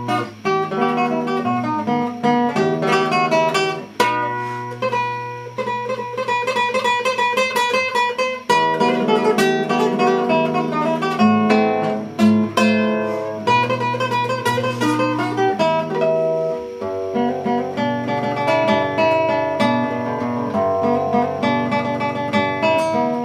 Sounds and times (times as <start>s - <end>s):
Acoustic guitar: 0.0s - 23.2s
Strum: 0.0s - 23.2s.